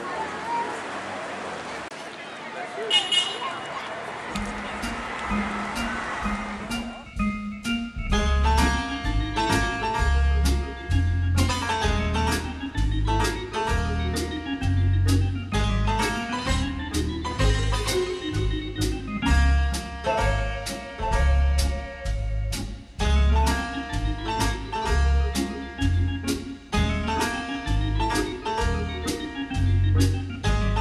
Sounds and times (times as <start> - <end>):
Jazz: 4.5 - 30.8.